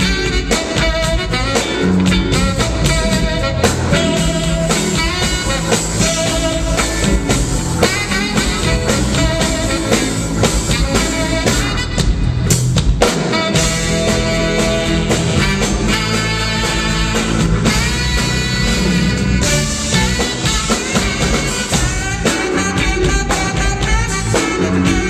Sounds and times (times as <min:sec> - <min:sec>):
Music: 0:00.0 - 0:25.0.